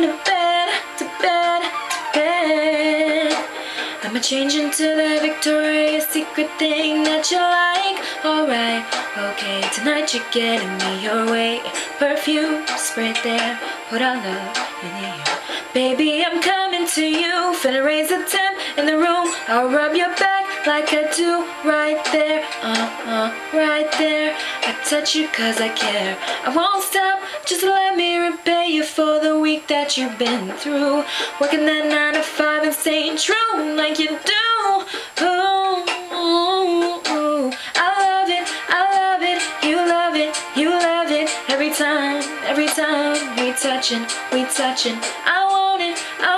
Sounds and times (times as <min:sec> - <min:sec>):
Female singing: 0:00.0 - 0:46.3
Music: 0:00.0 - 0:46.3.